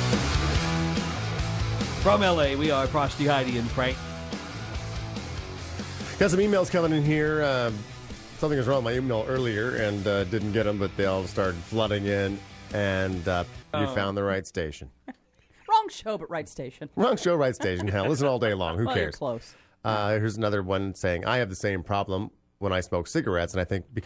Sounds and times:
Speech: 0:02.0 - 0:04.0, 0:06.2 - 0:07.8, 0:08.4 - 0:14.9, 0:15.7 - 0:24.0.

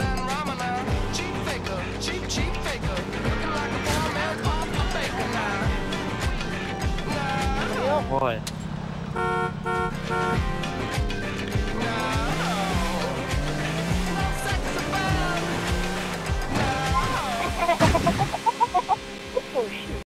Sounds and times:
Music: 0:00.0 - 0:08.4, 0:09.8 - 0:20.0.

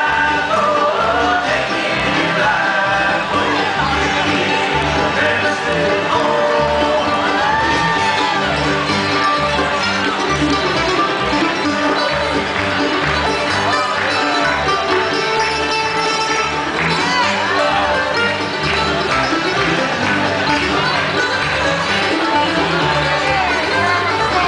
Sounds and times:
Music: 0:00.0 - 0:24.4.

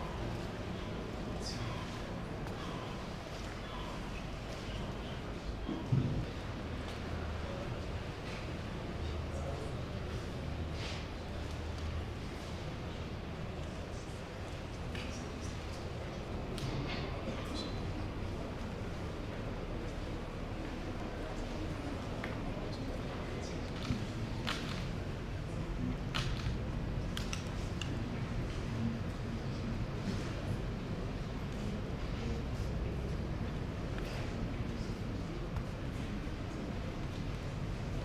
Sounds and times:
Speech: 0:00.0 - 0:38.0.

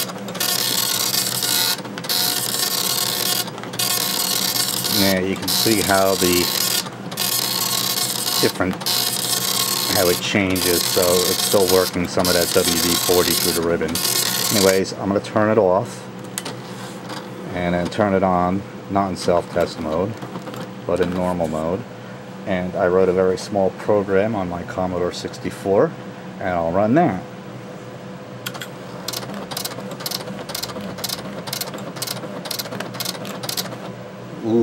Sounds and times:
Printer: 0:00.0 - 0:22.0, 0:28.5 - 0:34.6
Speech: 0:04.9 - 0:06.6, 0:08.4 - 0:08.8, 0:09.9 - 0:16.0, 0:17.5 - 0:20.2, 0:20.9 - 0:21.9, 0:22.5 - 0:27.3, 0:34.4 - 0:34.6.

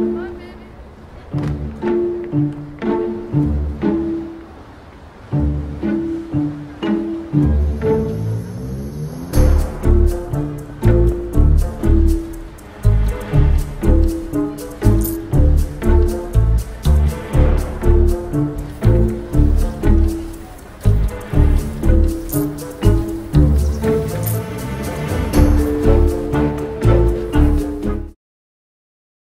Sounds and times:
Music: 0:00.0 - 0:00.7, 0:01.3 - 0:28.2.

